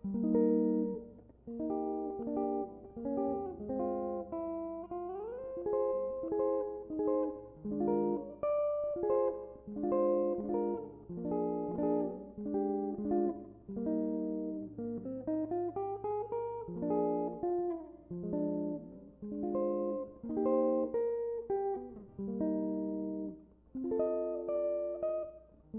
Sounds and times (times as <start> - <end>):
Electric guitar: 0.0 - 25.7.